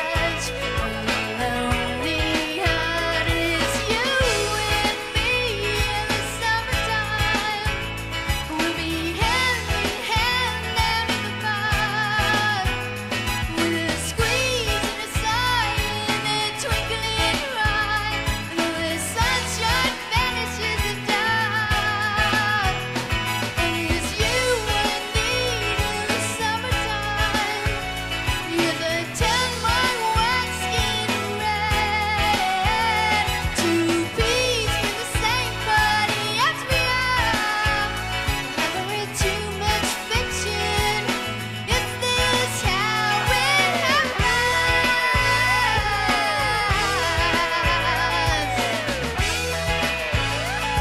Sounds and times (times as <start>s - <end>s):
Pop music: 0.0s - 50.8s.